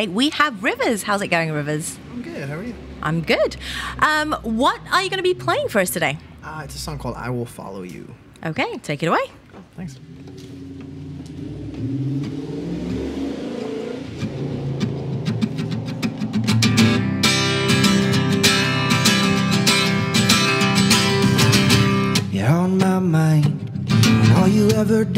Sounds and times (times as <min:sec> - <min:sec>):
Outside, urban or manmade: 0:00.0 - 0:25.1
Music: 0:15.3 - 0:25.1.